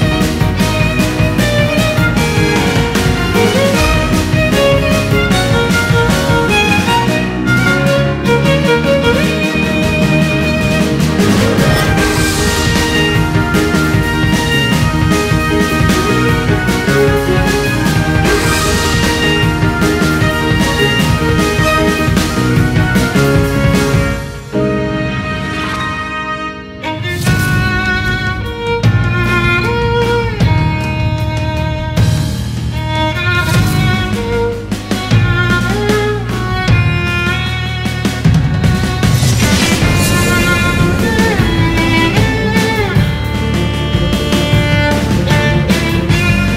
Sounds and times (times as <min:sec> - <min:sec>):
Violin, fiddle: 0:00.0 - 0:46.5.